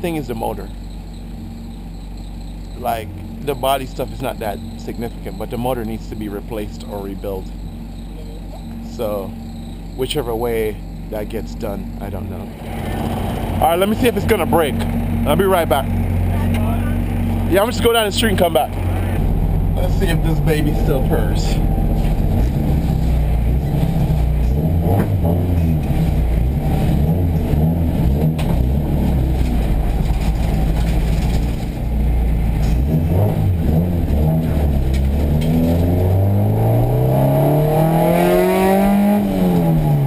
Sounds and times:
Car: 0.0s - 40.0s.

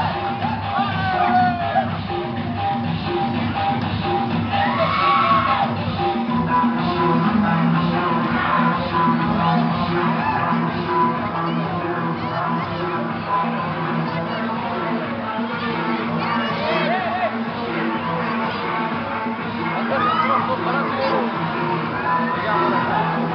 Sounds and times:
Music: 0.0s - 23.3s.

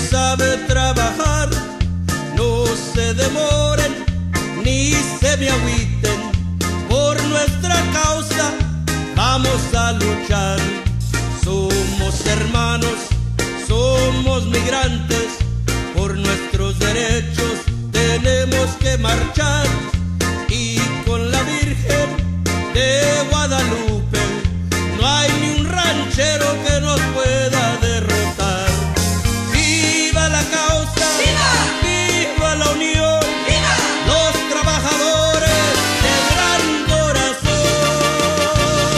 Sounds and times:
Music: 0.0s - 38.9s
Singing: 29.6s - 38.9s.

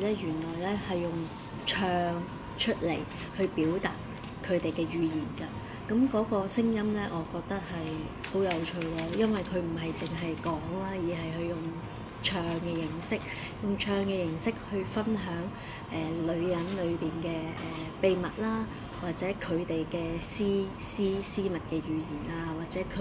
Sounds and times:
Speech: 0.0s - 23.0s.

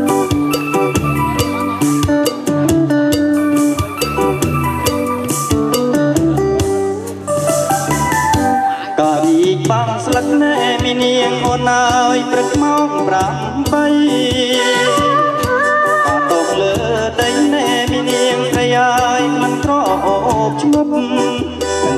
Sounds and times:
Music: 0.0s - 21.9s.

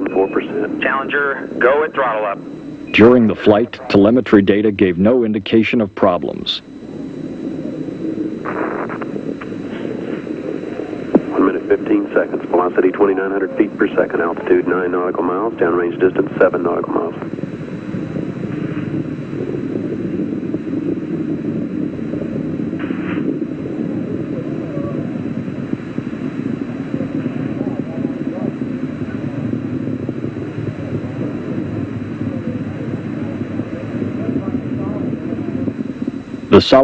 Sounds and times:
Speech: 0.0s - 6.7s, 11.3s - 17.3s, 36.5s - 36.8s.

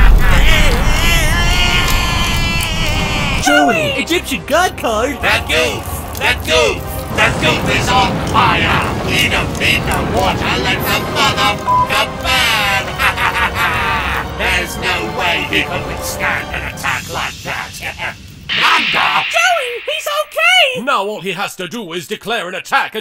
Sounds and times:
Music: 0.1s - 18.6s
Speech: 3.4s - 12.8s, 14.4s - 23.0s.

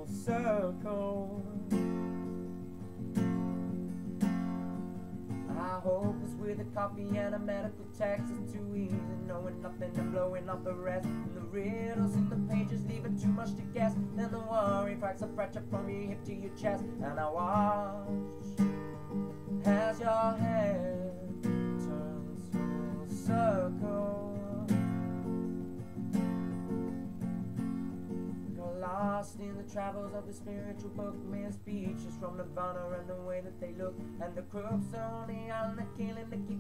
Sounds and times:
Music: 0.0s - 36.6s.

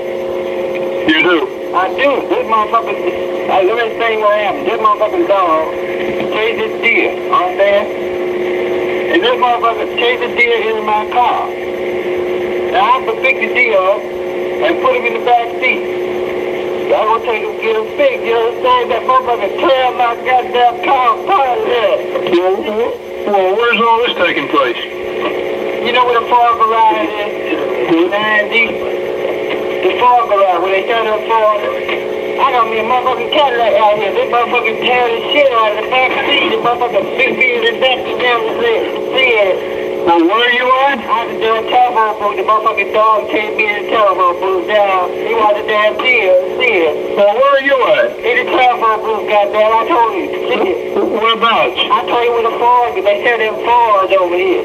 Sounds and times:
Speech: 1.1s - 5.7s, 6.3s - 7.9s, 9.1s - 11.6s, 12.7s - 14.0s, 14.6s - 15.8s, 16.9s - 24.9s, 25.8s - 28.8s, 29.8s - 31.8s, 32.4s - 54.6s.

